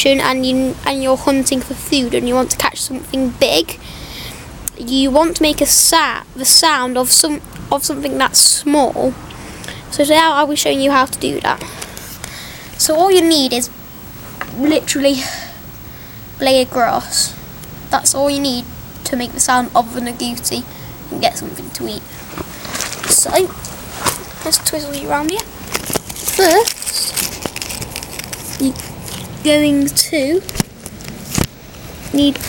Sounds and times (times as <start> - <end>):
Speech: 0.0 - 3.8, 4.7 - 9.2, 9.9 - 11.7, 12.8 - 13.7, 14.5 - 15.6, 16.4 - 22.0, 23.1 - 23.5, 24.4 - 25.5, 26.4 - 27.2, 29.4 - 30.5, 32.1 - 32.4.